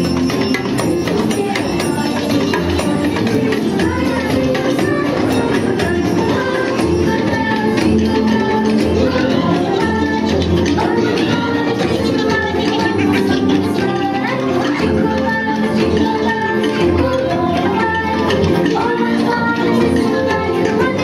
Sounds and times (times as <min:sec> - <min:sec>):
Rattle (instrument): 0:00.0 - 0:21.0.